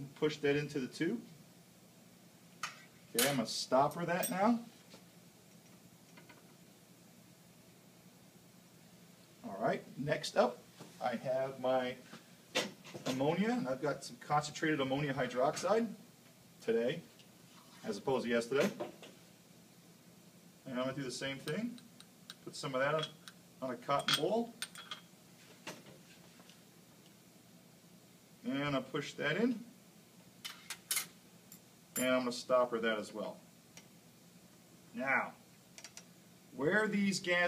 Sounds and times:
Speech: 0.0 - 1.3, 3.1 - 4.7, 9.4 - 12.0, 13.0 - 16.0, 16.6 - 17.1, 17.8 - 18.8, 20.7 - 21.8, 22.5 - 24.6, 28.4 - 29.7, 32.0 - 33.4, 34.9 - 35.4, 36.6 - 37.4.

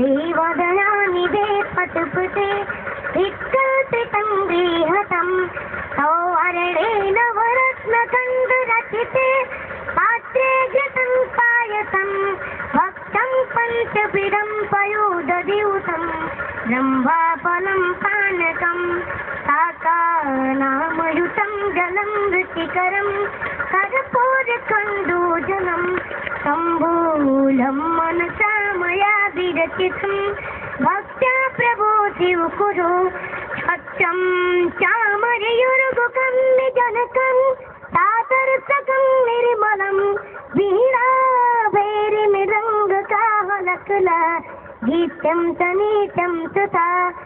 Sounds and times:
Mantra: 0.0 - 47.2.

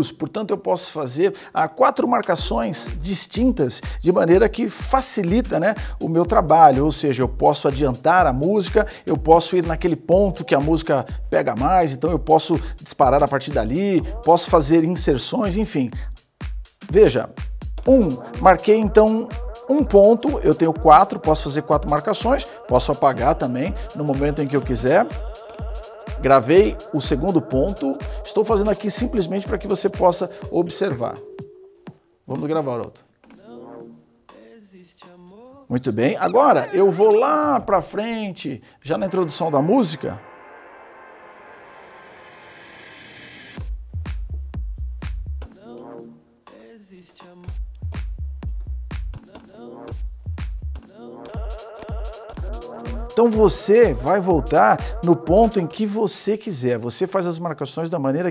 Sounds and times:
Speech: 0.0 - 16.0, 16.8 - 25.2, 26.2 - 31.2, 32.3 - 33.6, 35.6 - 40.2, 53.2 - 58.3.

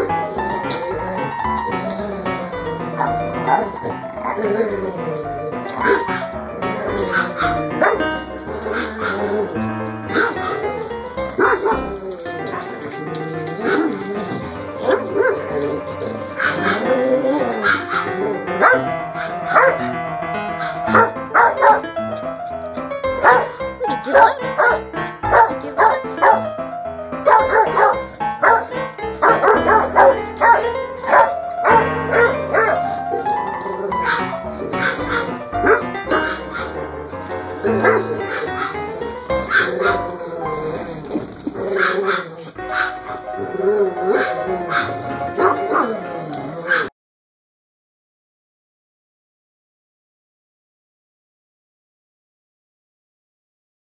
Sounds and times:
Dog: 0.0 - 20.0, 20.6 - 22.2, 23.1 - 26.5, 27.3 - 46.9
Canidae, dogs, wolves: 0.0 - 22.5, 23.1 - 26.6, 27.2 - 46.9
Music: 0.0 - 46.9.

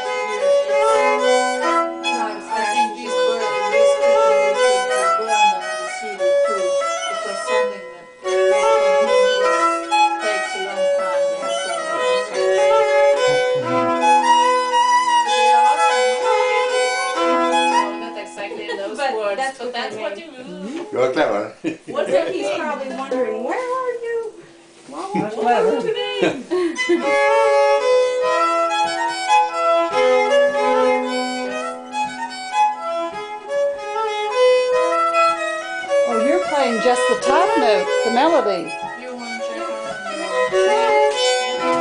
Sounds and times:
Violin, fiddle: 0.0 - 20.2, 25.4 - 41.8
Speech: 36.1 - 40.5.

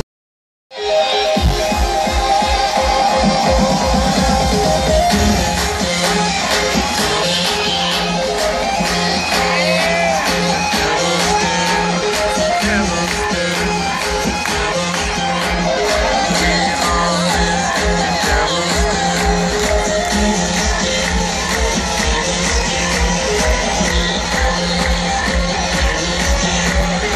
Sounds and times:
Music: 0.7 - 27.1
Singing: 2.1 - 27.1.

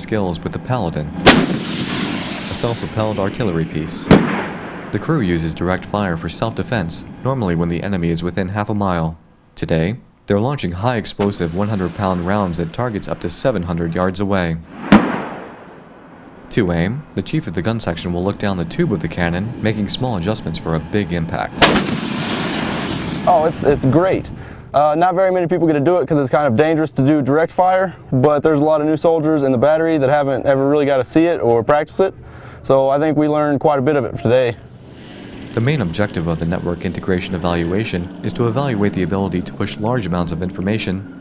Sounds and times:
Artillery fire: 1.2 - 3.4, 4.0 - 5.0, 14.7 - 16.0, 21.6 - 23.4.

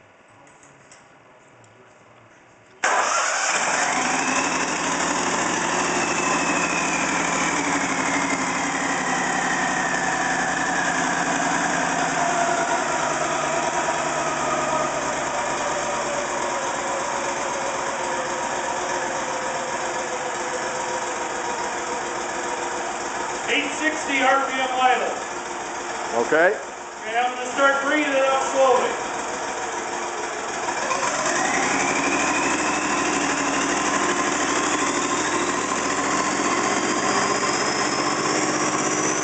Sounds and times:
Engine: 2.8 - 39.2.

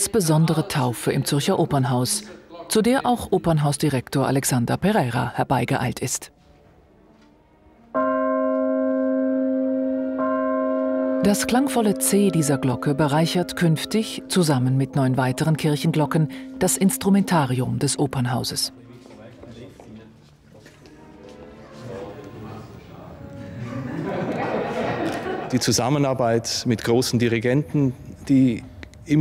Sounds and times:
Church bell: 8.0 - 19.9.

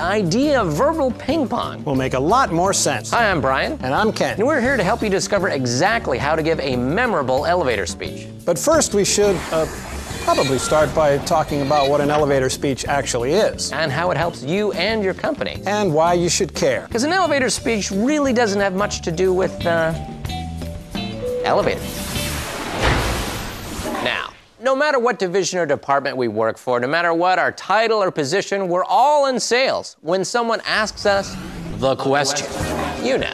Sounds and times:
Music: 0.0 - 24.3, 30.8 - 33.3.

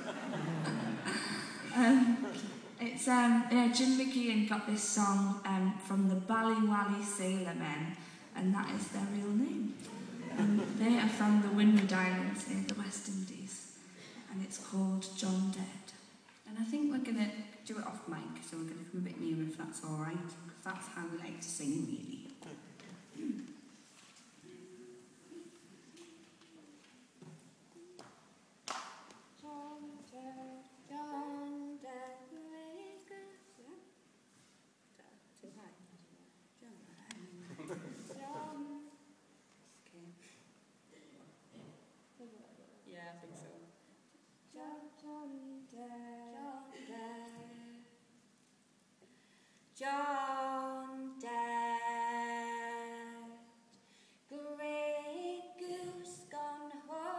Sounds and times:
Speech: 1.8 - 13.7, 14.3 - 23.5.

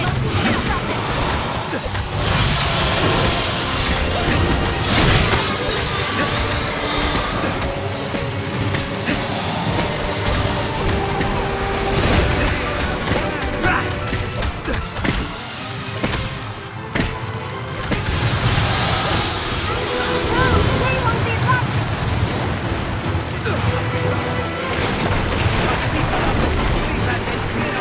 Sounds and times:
Music: 0.0 - 27.8.

